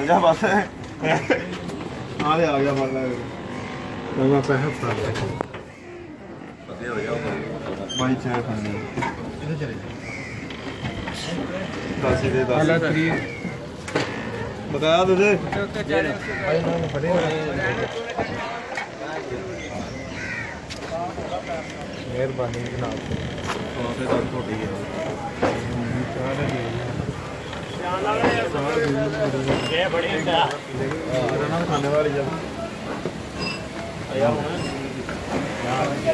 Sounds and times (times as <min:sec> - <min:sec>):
Train: 0:32.3 - 0:34.0, 0:34.6 - 0:36.1.